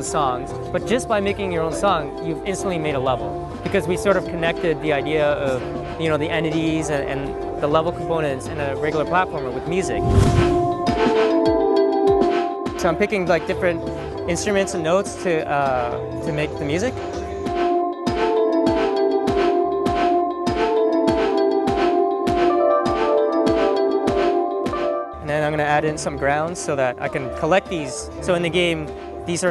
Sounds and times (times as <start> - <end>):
Speech: 0.0 - 10.0, 12.8 - 17.4, 25.2 - 29.5
Music: 0.0 - 29.5.